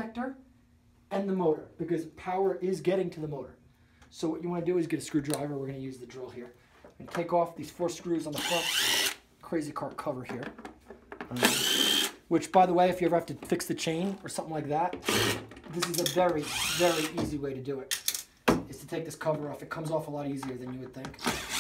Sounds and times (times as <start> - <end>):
Speech: 0.0 - 0.4, 1.1 - 8.7, 9.4 - 10.6, 12.3 - 15.0, 15.7 - 18.0, 18.6 - 21.3.